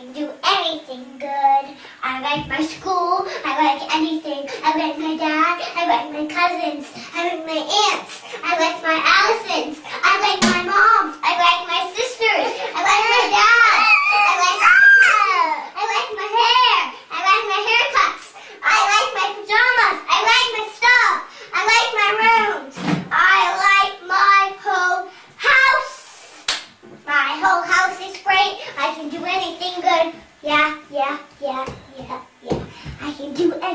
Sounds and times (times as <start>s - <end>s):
Child speech, kid speaking: 0.0s - 33.7s
Inside, small room: 0.0s - 33.7s.